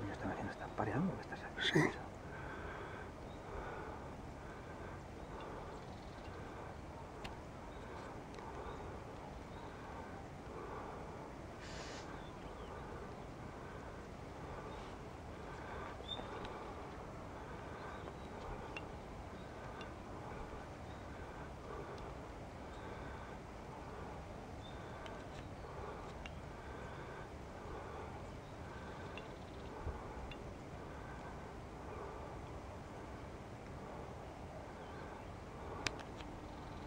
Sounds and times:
Outside, rural or natural: 0.0s - 36.8s.

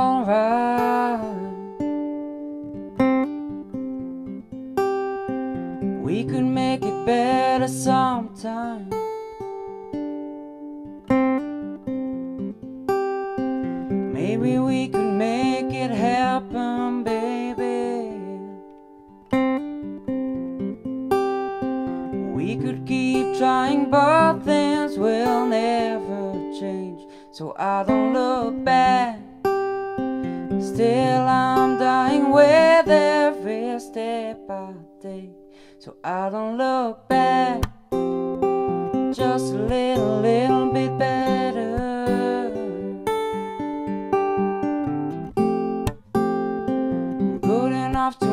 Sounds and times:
Music: 0.0s - 48.3s.

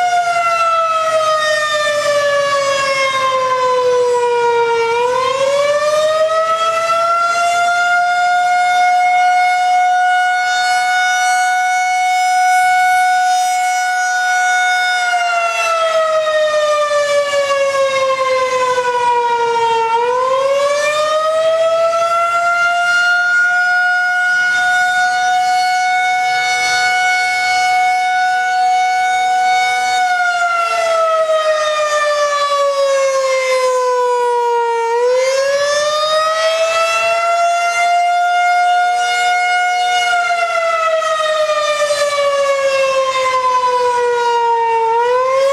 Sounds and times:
Civil defense siren: 0.0s - 45.5s.

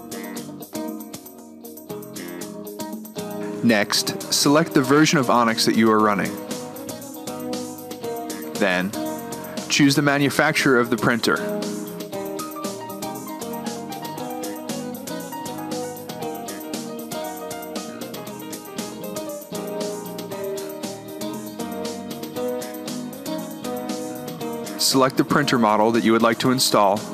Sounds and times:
Music: 0.0s - 27.1s.

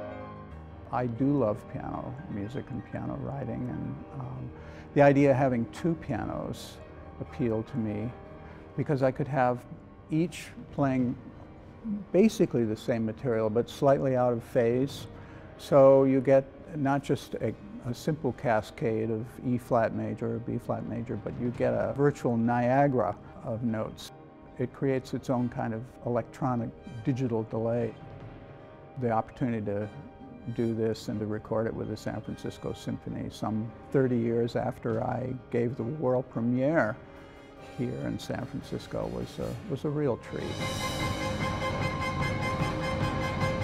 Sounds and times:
Speech: 0.9s - 8.2s, 8.8s - 11.2s, 11.8s - 28.0s, 29.0s - 37.0s, 37.8s - 40.7s.

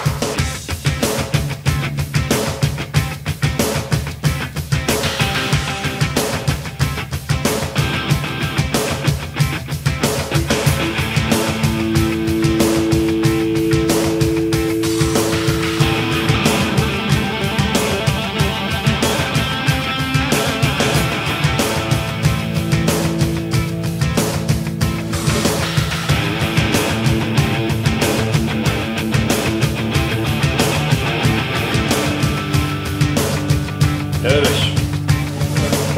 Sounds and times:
Punk rock: 0.0s - 35.9s.

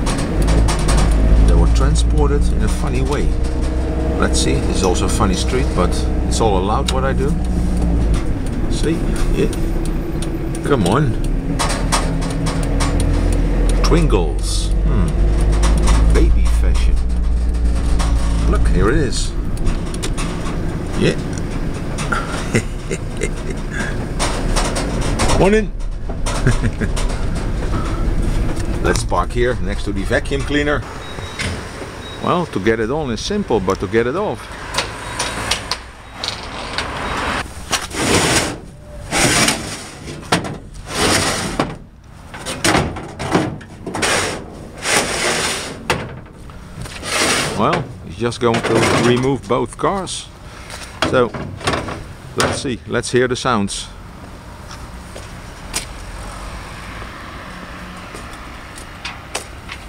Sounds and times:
Speech: 1.4s - 3.4s, 4.2s - 7.4s, 8.7s - 9.6s, 10.6s - 11.2s, 13.8s - 15.2s, 16.1s - 17.0s, 18.4s - 19.4s, 21.0s - 21.2s, 25.3s - 25.7s, 28.8s - 30.9s, 32.2s - 34.5s, 47.5s - 50.3s, 51.0s - 51.4s, 52.4s - 54.0s.

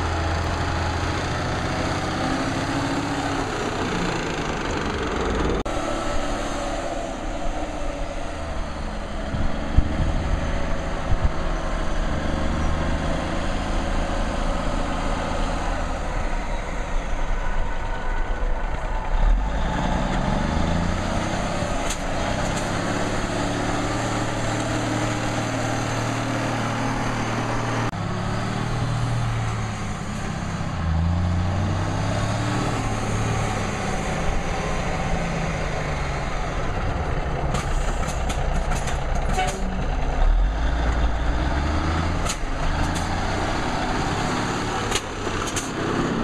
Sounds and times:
Truck: 0.0s - 46.2s.

